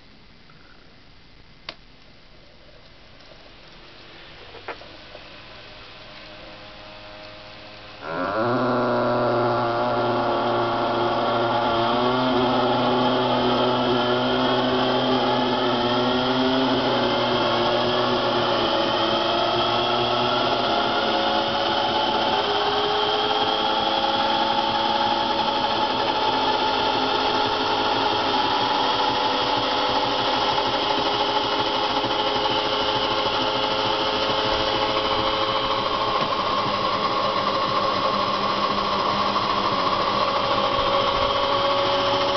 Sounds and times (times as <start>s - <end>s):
Hum: 0.0s - 42.3s
Mains hum: 0.0s - 42.3s.